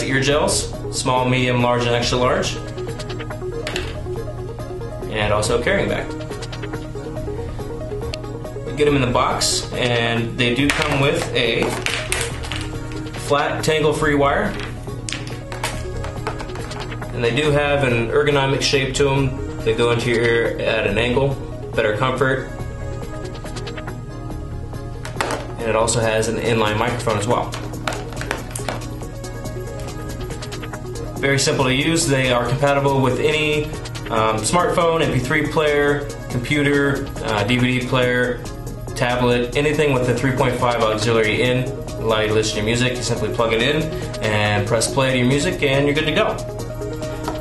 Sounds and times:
Speech: 0.0s - 2.6s, 5.1s - 6.1s, 8.7s - 11.7s, 13.2s - 14.5s, 17.2s - 22.5s, 25.6s - 27.6s, 31.2s - 38.4s, 39.0s - 46.4s
Music: 0.0s - 47.4s.

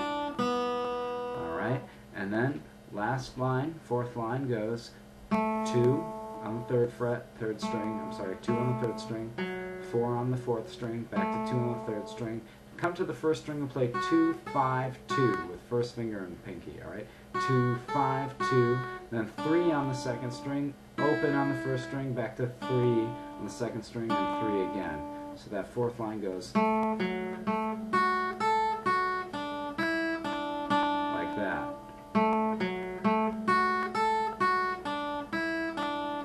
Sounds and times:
Acoustic guitar: 0.0s - 36.2s
Speech: 1.4s - 5.0s, 5.6s - 26.6s, 31.1s - 31.8s.

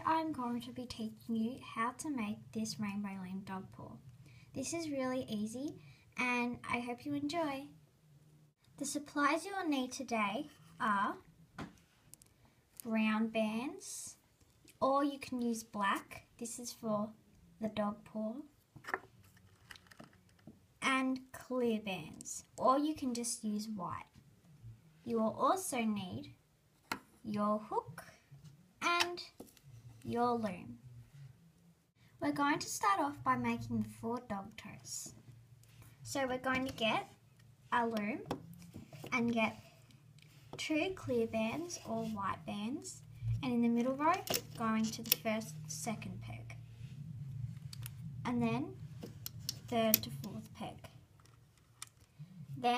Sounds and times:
Speech: 0.0s - 4.0s, 4.6s - 7.8s, 8.8s - 11.3s, 12.8s - 14.2s, 14.8s - 18.5s, 20.8s - 24.2s, 25.0s - 26.4s, 27.2s - 28.2s, 28.8s - 29.4s, 30.0s - 30.8s, 32.2s - 35.2s, 36.0s - 38.4s, 39.1s - 39.6s, 40.6s - 46.6s, 48.2s - 48.8s, 49.7s - 51.0s, 52.6s - 52.7s.

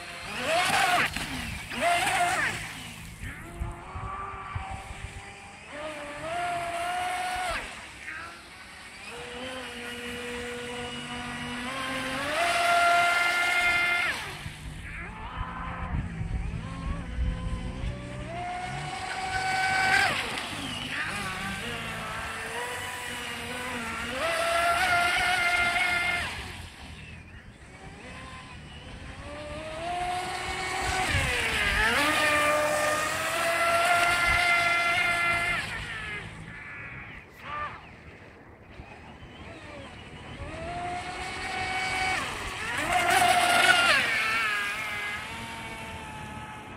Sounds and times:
Motorboat, speedboat: 0.0s - 46.7s.

